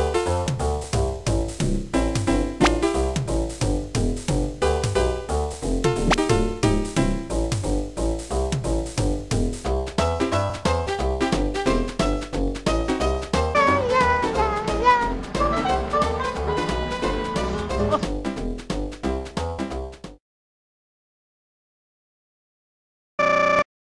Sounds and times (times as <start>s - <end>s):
Music: 0.0s - 20.2s.